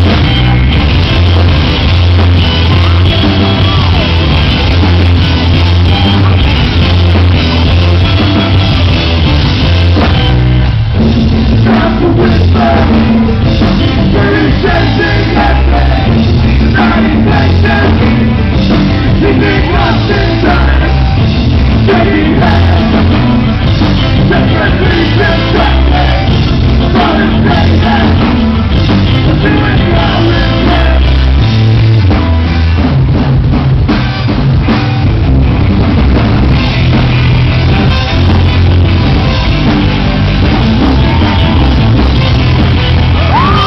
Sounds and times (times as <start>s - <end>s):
Musical instrument: 0.0s - 43.6s.